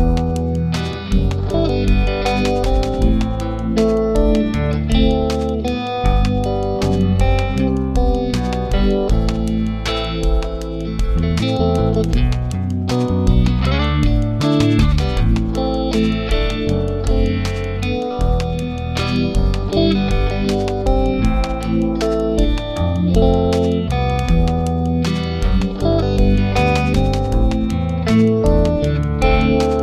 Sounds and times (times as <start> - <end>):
Music: 0.0 - 29.8.